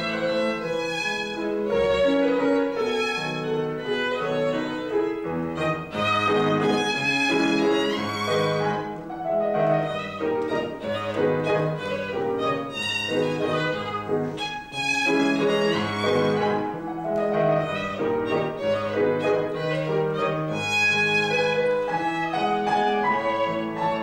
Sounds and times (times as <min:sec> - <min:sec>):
Violin, fiddle: 0:00.0 - 0:24.0.